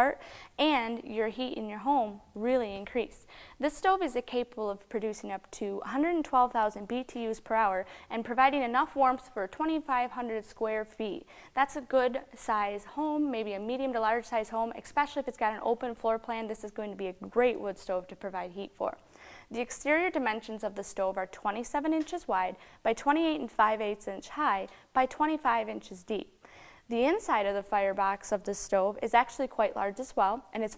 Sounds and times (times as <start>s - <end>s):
Speech: 0.0s - 30.7s.